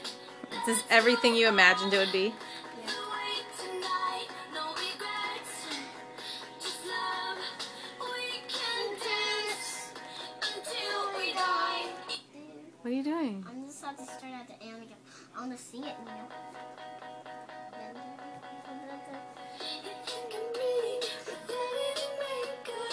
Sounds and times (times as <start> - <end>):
Music: 0.0 - 12.3, 15.8 - 22.9.